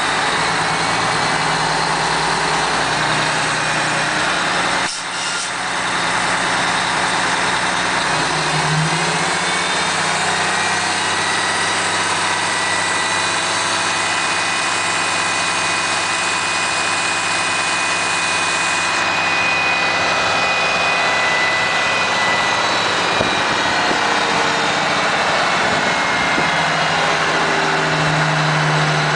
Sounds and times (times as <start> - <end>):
Bus: 0.0 - 29.1
Engine: 0.0 - 29.1.